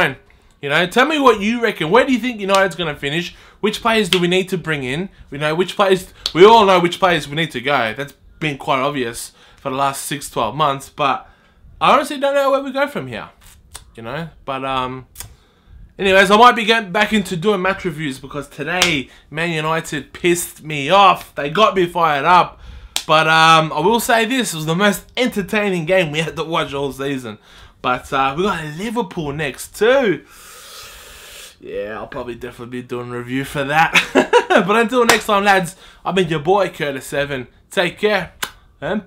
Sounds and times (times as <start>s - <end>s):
Speech: 0.0s - 15.3s, 16.0s - 30.3s, 31.6s - 39.0s
Inside, small room: 0.0s - 39.0s.